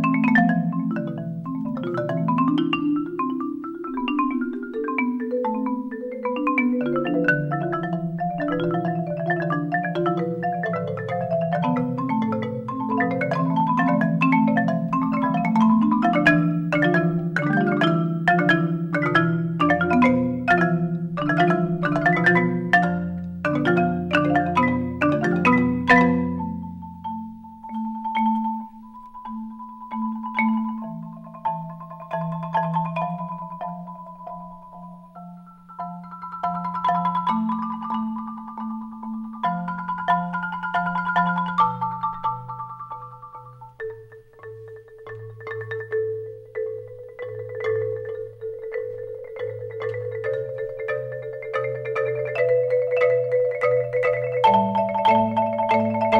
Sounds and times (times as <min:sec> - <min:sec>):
Marimba, xylophone: 0:00.0 - 0:56.1.